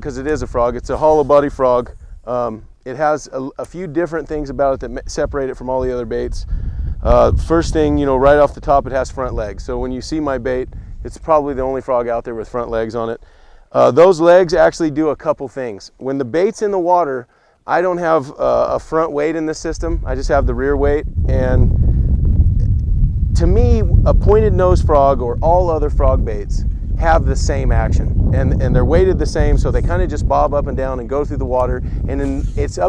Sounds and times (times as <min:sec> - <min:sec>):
Speech: 0:00.0 - 0:06.4, 0:07.0 - 0:21.7, 0:23.4 - 0:32.8.